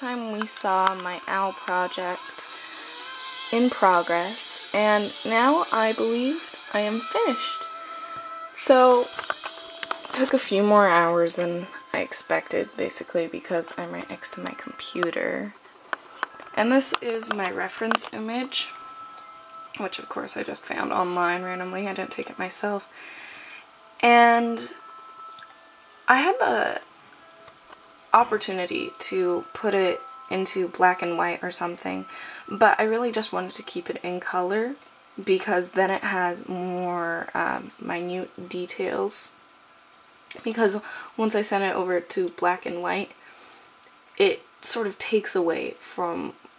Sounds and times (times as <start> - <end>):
Speech: 0.0 - 2.5, 3.6 - 7.6, 8.6 - 9.1, 10.1 - 15.6, 16.6 - 18.7, 19.8 - 22.8, 24.0 - 24.8, 26.1 - 26.8, 28.2 - 39.4, 40.3 - 43.1, 44.2 - 46.4
Music: 0.0 - 46.5.